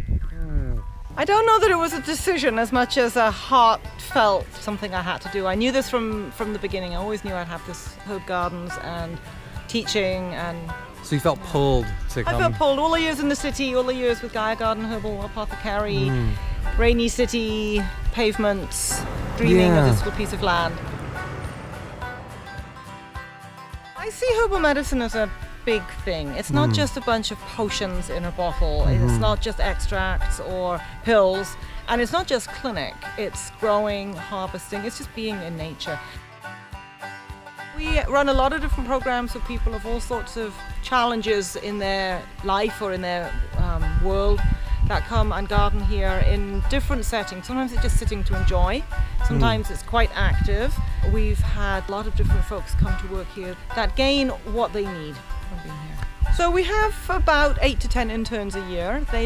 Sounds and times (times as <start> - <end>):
Music: 0.0 - 59.2
Speech: 0.4 - 20.7, 24.0 - 36.0, 37.8 - 59.2.